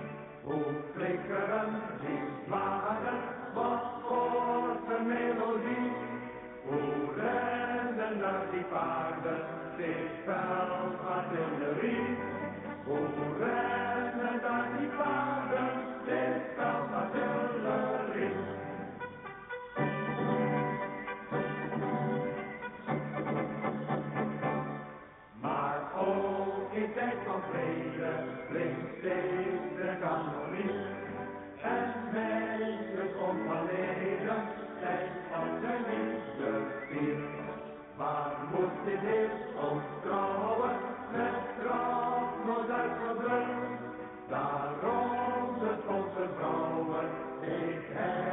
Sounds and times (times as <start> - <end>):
Music: 0.0 - 48.3.